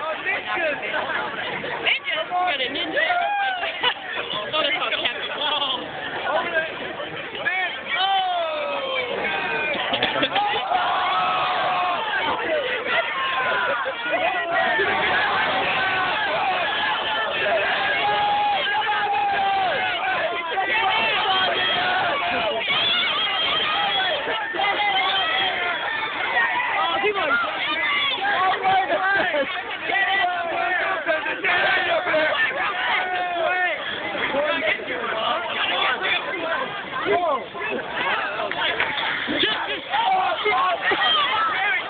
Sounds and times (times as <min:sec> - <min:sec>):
Speech: 0:00.0 - 0:41.8.